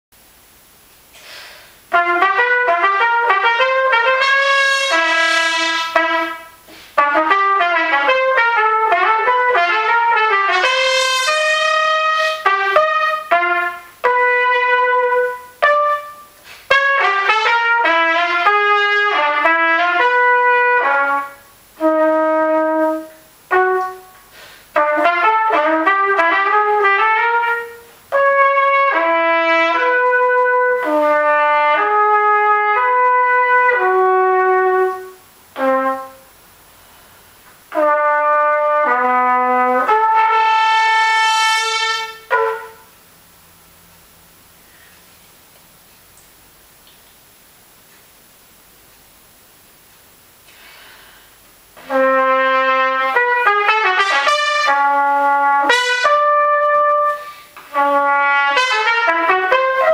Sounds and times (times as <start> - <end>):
Trumpet: 1.8 - 43.1, 51.7 - 59.9.